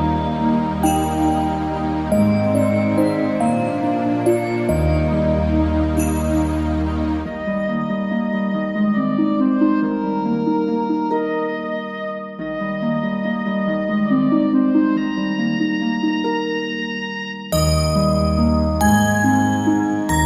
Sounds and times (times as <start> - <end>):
Christian music: 0.0 - 10.9
Background music: 0.0 - 20.2
Christmas music: 0.0 - 20.2.